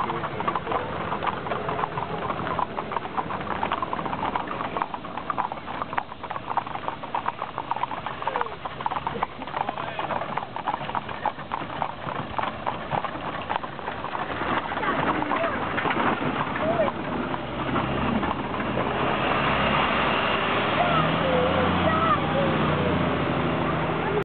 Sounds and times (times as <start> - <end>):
Clip-clop: 0.0 - 24.2
Speech: 9.7 - 10.2, 14.8 - 15.7, 16.6 - 17.0, 20.7 - 22.7, 23.6 - 24.2.